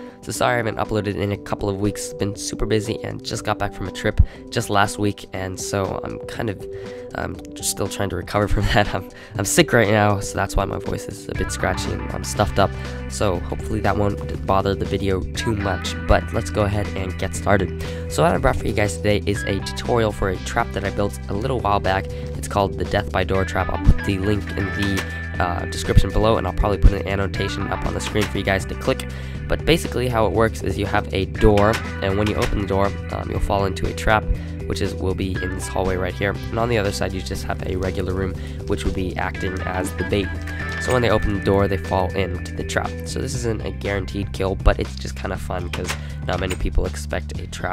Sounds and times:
Music: 0.0s - 47.7s
Speech: 0.2s - 47.7s.

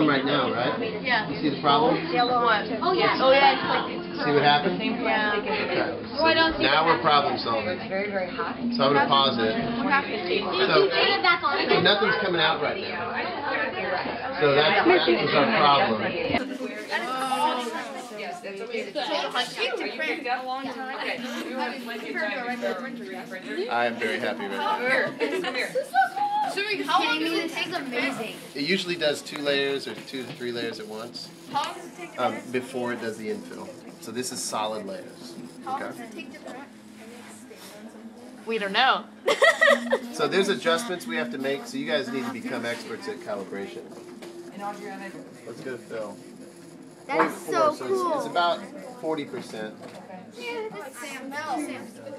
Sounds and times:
Printer: 19.0s - 38.9s, 39.7s - 50.5s.

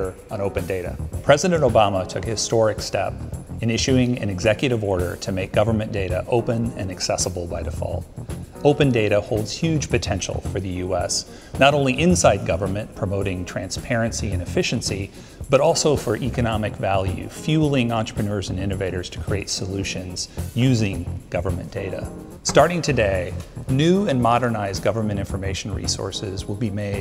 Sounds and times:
Music: 0.0s - 27.0s
Speech: 0.0s - 27.0s.

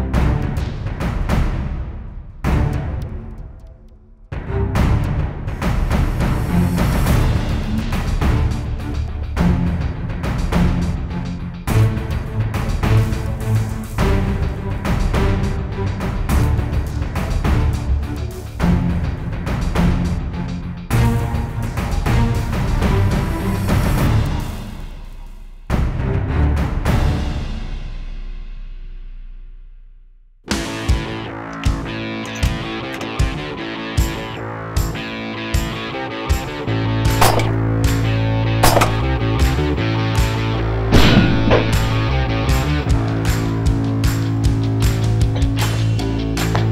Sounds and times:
Music: 0.0s - 46.7s.

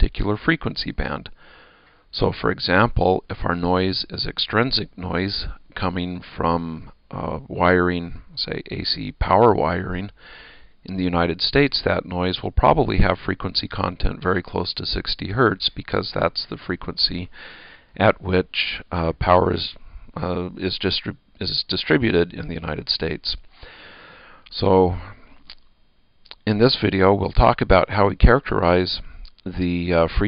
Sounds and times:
Speech: 0.0s - 1.4s, 2.1s - 10.2s, 10.8s - 17.3s, 18.0s - 23.4s, 24.5s - 25.2s, 26.3s - 30.2s.

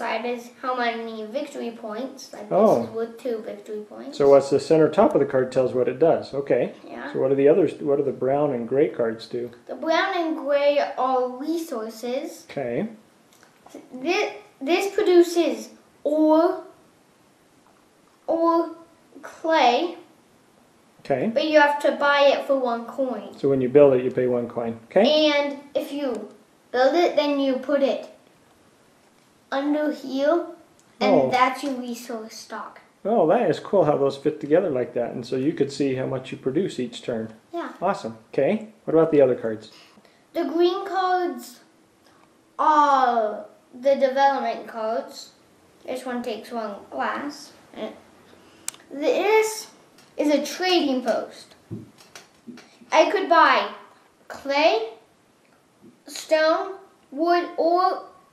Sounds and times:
Speech: 0.0s - 13.0s, 21.0s - 28.1s, 29.6s - 39.7s
Inside, small room: 0.0s - 58.3s.

